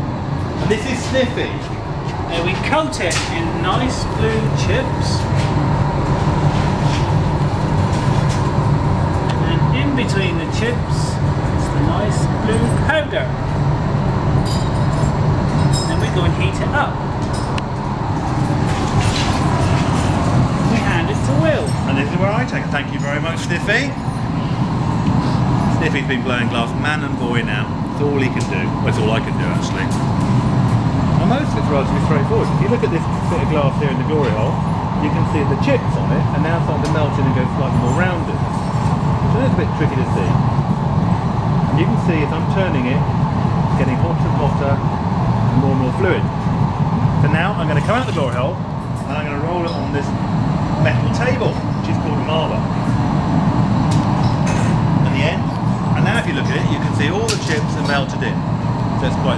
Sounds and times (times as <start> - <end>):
Speech: 0.6 - 1.7, 2.3 - 5.3, 9.4 - 13.4, 15.8 - 17.0, 20.7 - 24.0, 25.8 - 30.0, 31.2 - 38.4, 39.3 - 40.4, 41.7 - 43.1, 43.7 - 44.8, 45.5 - 46.3, 47.2 - 50.2, 50.8 - 52.7, 55.0 - 58.4, 59.0 - 59.3.